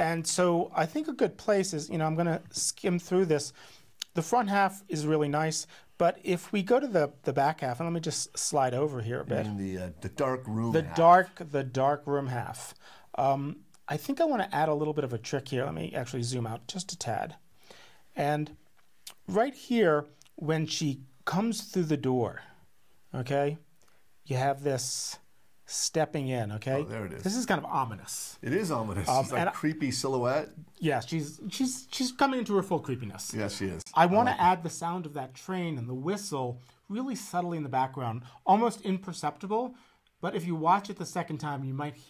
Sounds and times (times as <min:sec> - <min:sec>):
Speech: 0:00.0 - 0:17.4, 0:18.2 - 0:23.6, 0:24.3 - 0:42.0.